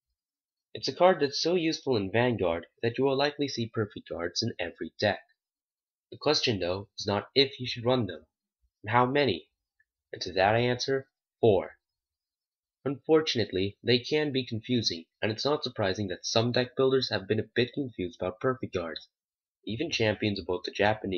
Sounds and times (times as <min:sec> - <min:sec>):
Speech: 0:00.8 - 0:05.4, 0:06.1 - 0:11.9, 0:12.8 - 0:21.1.